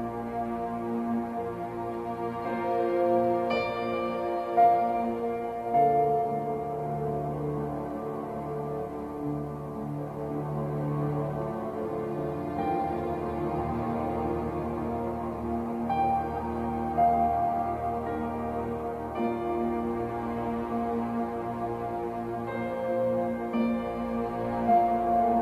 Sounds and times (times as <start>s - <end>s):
Electric piano: 0.0s - 10.3s, 11.8s - 25.4s.